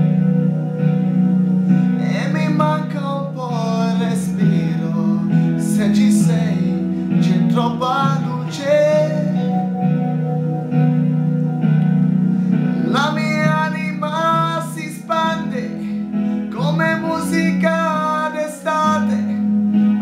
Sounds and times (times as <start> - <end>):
Music: 0.0 - 20.0
Male singing: 2.0 - 9.6, 12.8 - 19.4.